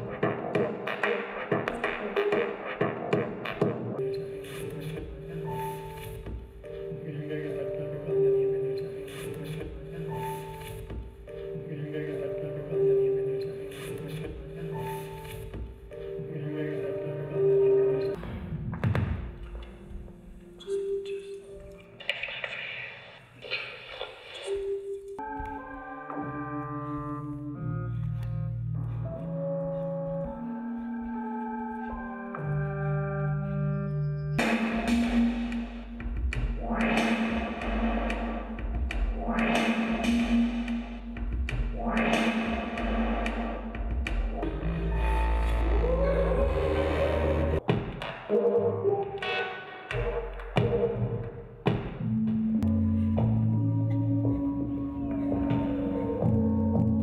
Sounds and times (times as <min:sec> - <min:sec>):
Music: 0:00.0 - 0:57.0
Speech: 0:11.6 - 0:14.9.